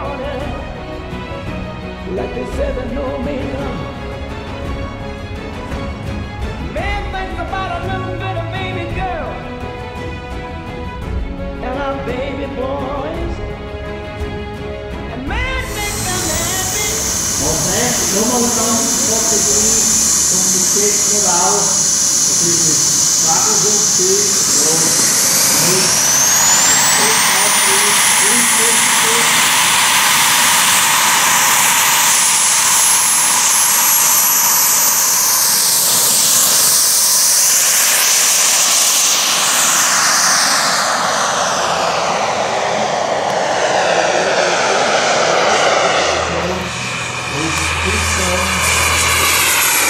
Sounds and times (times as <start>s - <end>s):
Fixed-wing aircraft, airplane: 0.0s - 49.9s.